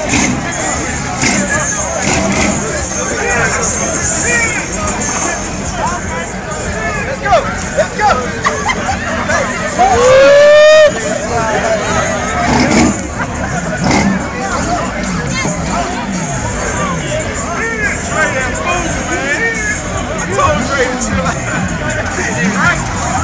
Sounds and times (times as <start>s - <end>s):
Speech: 0.0s - 10.2s, 10.8s - 23.2s
Car: 0.0s - 23.2s
Music: 13.2s - 23.2s.